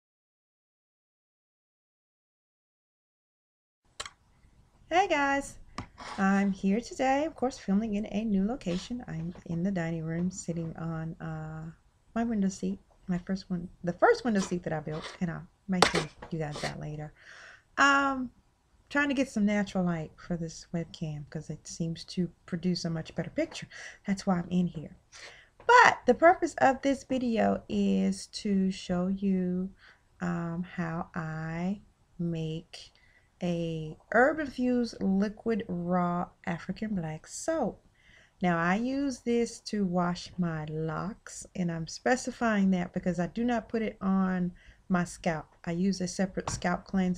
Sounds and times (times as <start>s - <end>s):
Speech: 4.9s - 17.2s, 17.8s - 18.3s, 18.9s - 25.0s, 25.6s - 37.8s, 38.4s - 47.1s.